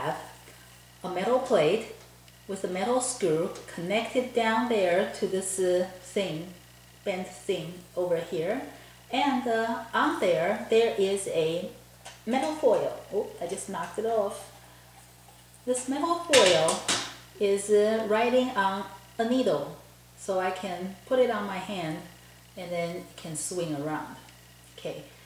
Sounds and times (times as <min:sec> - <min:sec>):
Speech: 0:00.0 - 0:00.4, 0:01.0 - 0:14.5, 0:15.7 - 0:25.2.